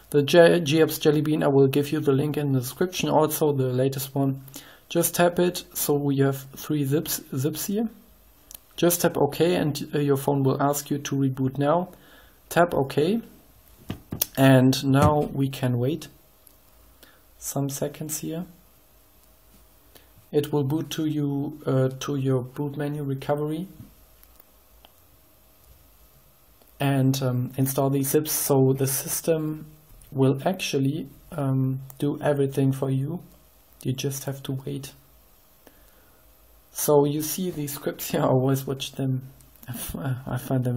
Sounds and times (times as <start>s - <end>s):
Speech: 0.1s - 13.4s, 14.1s - 16.2s, 17.4s - 18.6s, 20.3s - 23.9s, 26.8s - 35.0s, 36.7s - 40.7s.